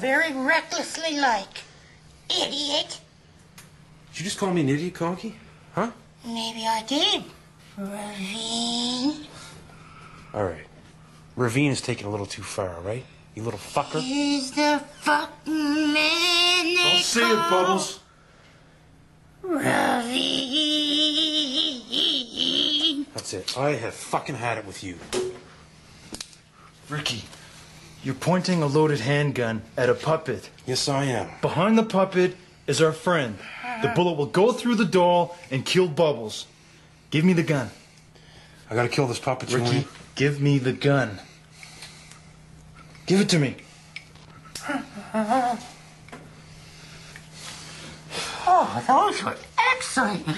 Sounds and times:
Inside, small room: 0:00.0 - 0:50.3.

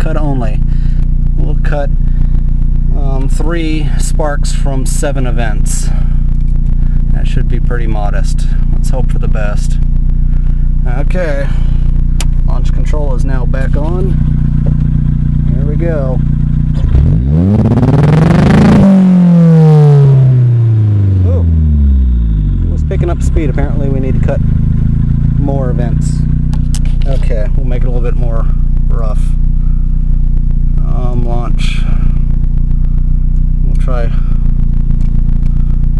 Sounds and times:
Speech: 0:00.0 - 0:00.6, 0:01.4 - 0:01.9, 0:02.9 - 0:06.1, 0:07.1 - 0:09.8, 0:10.8 - 0:11.7, 0:12.4 - 0:14.2, 0:15.5 - 0:16.2, 0:21.2 - 0:21.5, 0:22.7 - 0:24.4, 0:25.4 - 0:26.2, 0:27.0 - 0:29.4, 0:30.8 - 0:32.2, 0:33.6 - 0:34.4
Car: 0:00.0 - 0:35.9
Accelerating, revving, vroom: 0:16.8 - 0:21.1.

